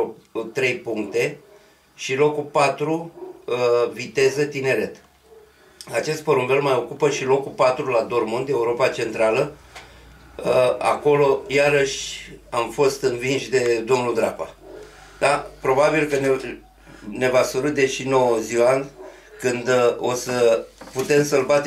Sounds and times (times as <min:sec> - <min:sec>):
Speech: 0:00.0 - 0:01.4, 0:02.0 - 0:05.0, 0:05.9 - 0:09.6, 0:10.4 - 0:14.6, 0:15.2 - 0:21.6
Inside, small room: 0:00.0 - 0:21.6.